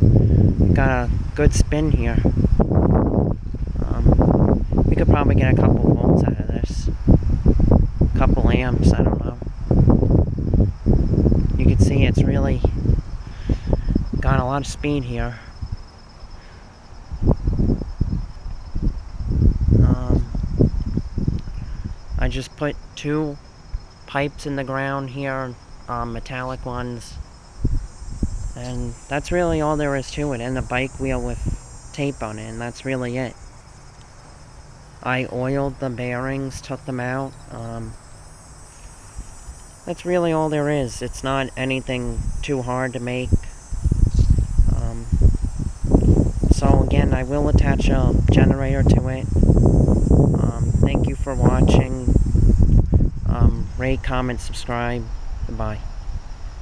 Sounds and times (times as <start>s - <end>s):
Wind: 0.0s - 56.6s.